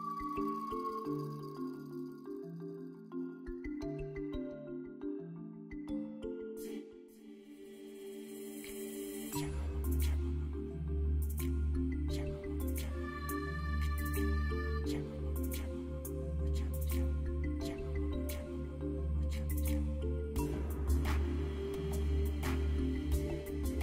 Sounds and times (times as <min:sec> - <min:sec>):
Music: 0:00.0 - 0:23.8.